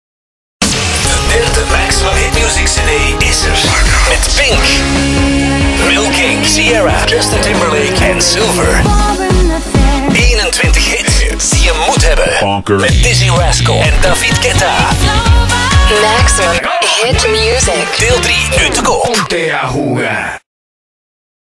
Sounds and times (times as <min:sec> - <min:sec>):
Music: 0:00.6 - 0:19.3
Speech: 0:01.1 - 0:04.9, 0:05.8 - 0:08.9, 0:10.1 - 0:15.1, 0:15.8 - 0:20.5.